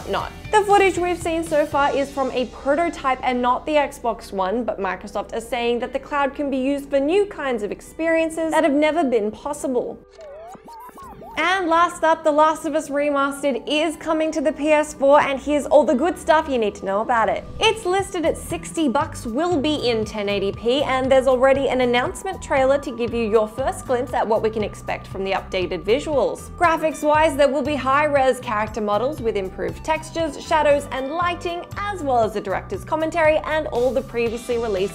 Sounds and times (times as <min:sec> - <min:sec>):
Speech: 0:00.0 - 0:10.0, 0:10.8 - 0:34.9
Music: 0:00.0 - 0:34.9.